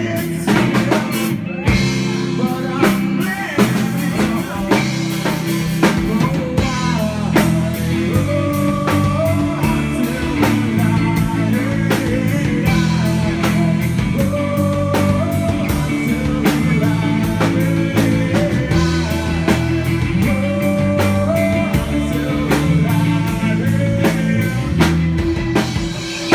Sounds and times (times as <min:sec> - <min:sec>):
Male singing: 0:00.0 - 0:25.0
Music: 0:00.0 - 0:26.3.